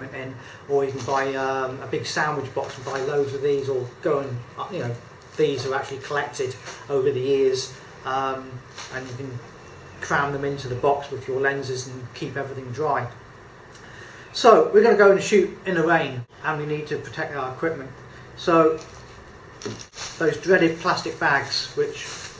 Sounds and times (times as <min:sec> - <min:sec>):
Speech: 0:00.0 - 0:13.2, 0:14.3 - 0:18.9, 0:19.6 - 0:22.3.